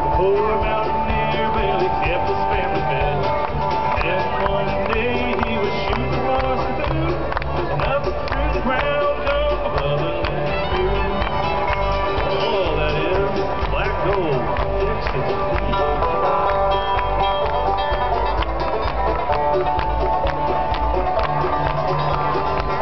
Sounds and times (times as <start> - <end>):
Country: 0.0 - 22.8.